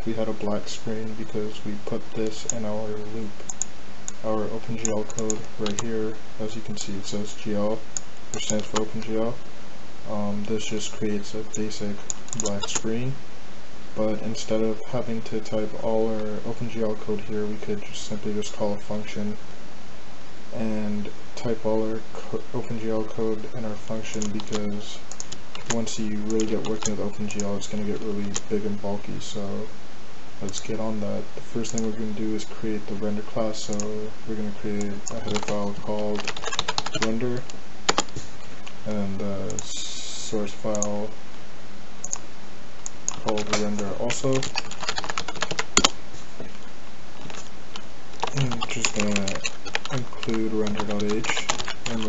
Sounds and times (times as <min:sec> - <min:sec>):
Speech: 0:00.0 - 0:03.5, 0:04.2 - 0:09.4, 0:10.1 - 0:13.2, 0:14.0 - 0:19.4, 0:20.5 - 0:29.8, 0:30.4 - 0:37.5, 0:38.8 - 0:41.2, 0:43.2 - 0:44.5, 0:48.3 - 0:52.0.